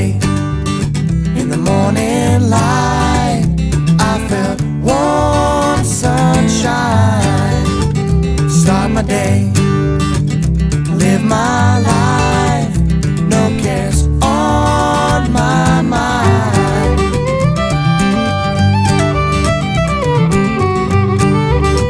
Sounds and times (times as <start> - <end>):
Musical instrument: 14.3 - 21.8.